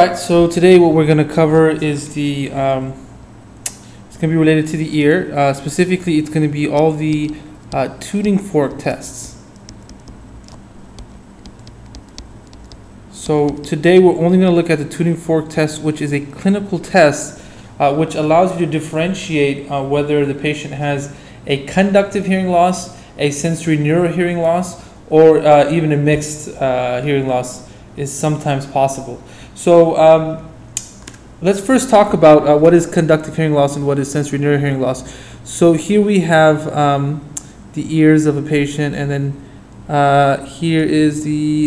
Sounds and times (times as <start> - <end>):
Speech: 0.0 - 3.0, 4.1 - 9.4, 13.2 - 30.6, 31.4 - 41.6.